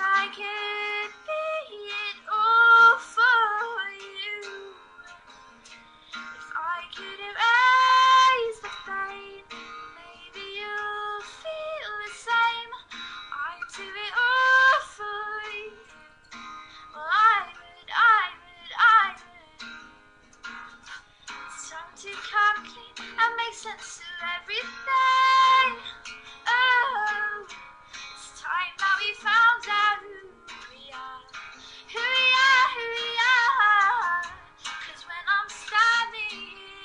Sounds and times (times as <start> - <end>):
Female singing: 0.0 - 5.2, 6.5 - 12.8, 13.4 - 15.9, 17.0 - 19.7, 21.6 - 25.9, 26.5 - 27.5, 28.2 - 36.8
Music: 0.0 - 36.8.